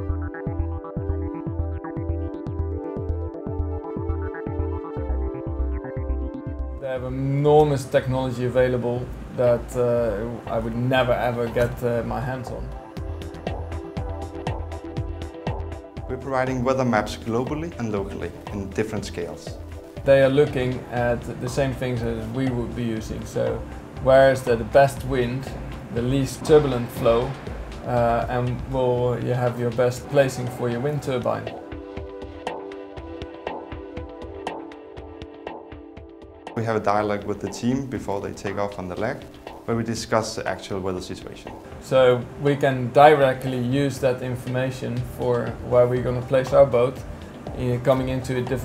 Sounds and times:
Music: 0.0s - 48.6s
Speech: 6.8s - 12.7s, 16.1s - 31.5s, 36.6s - 47.0s, 47.6s - 48.6s.

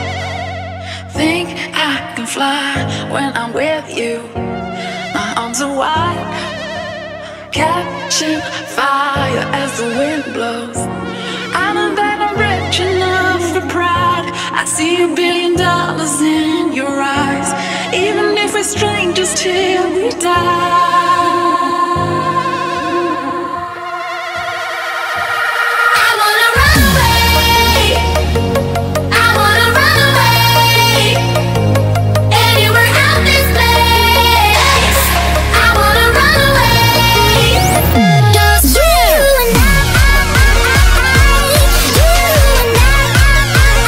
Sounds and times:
Music: 0.0s - 43.8s.

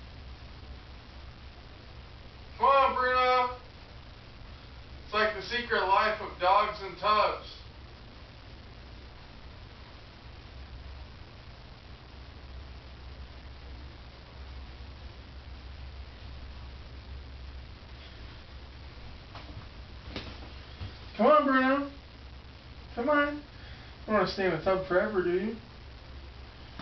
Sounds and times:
Speech: 2.6s - 3.6s, 5.1s - 7.7s, 21.2s - 22.0s, 22.9s - 23.5s, 24.1s - 25.6s.

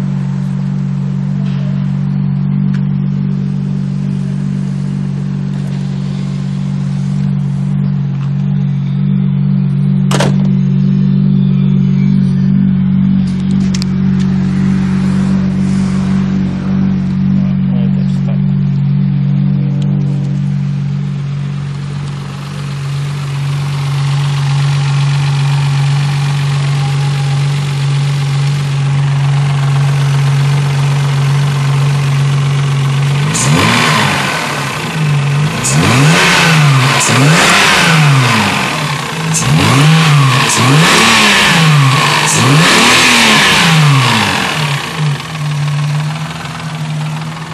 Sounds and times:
Car: 0.0s - 47.5s
Idling: 0.0s - 47.5s
Medium engine (mid frequency): 0.0s - 47.5s.

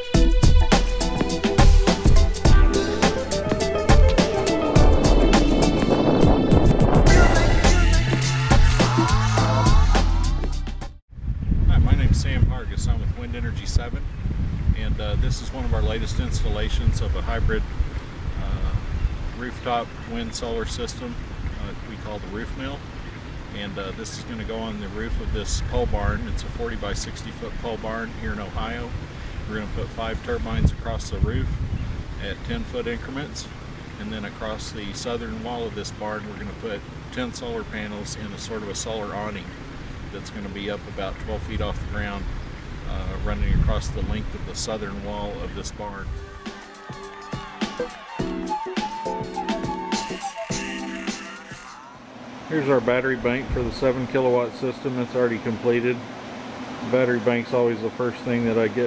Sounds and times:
Speech: 11.7s - 14.0s, 14.8s - 17.7s, 18.4s - 18.8s, 19.4s - 22.8s, 23.5s - 31.6s, 32.2s - 42.3s, 42.9s - 46.1s, 52.5s - 56.0s, 56.8s - 58.8s.

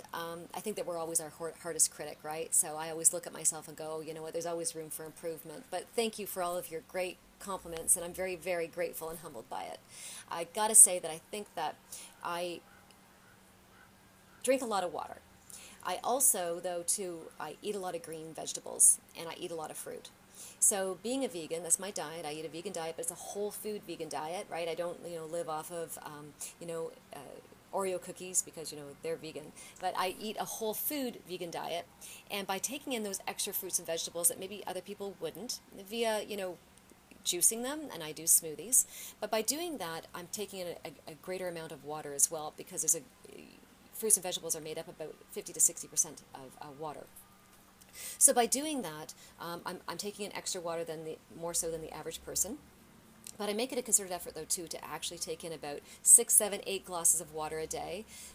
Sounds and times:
Speech: 0.0s - 12.6s, 14.4s - 15.2s, 15.8s - 36.6s, 37.2s - 47.1s, 48.2s - 52.6s, 53.3s - 58.0s.

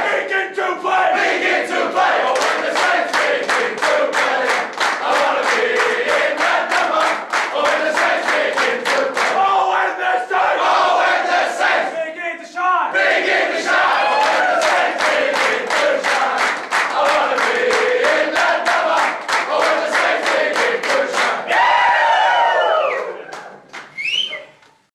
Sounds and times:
Choir: 0.0s - 12.0s, 12.9s - 23.2s.

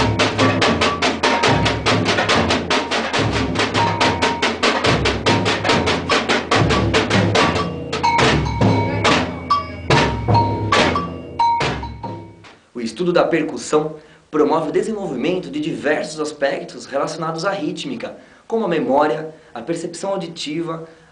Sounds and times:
Snare drum: 0.0s - 12.5s
Music of Latin America: 0.0s - 12.6s
Drum kit: 0.0s - 12.7s.

